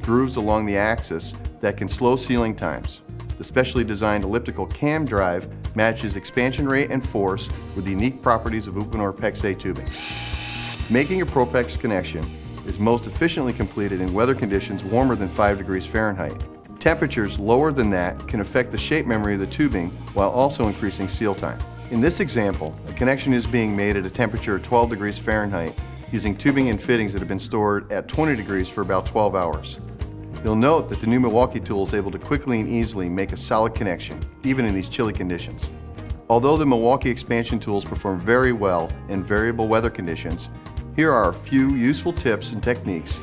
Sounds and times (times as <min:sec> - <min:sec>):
Speech: 0:00.0 - 0:09.8, 0:10.9 - 0:29.8, 0:30.4 - 0:35.7, 0:36.3 - 0:43.2
Music: 0:00.0 - 0:43.2.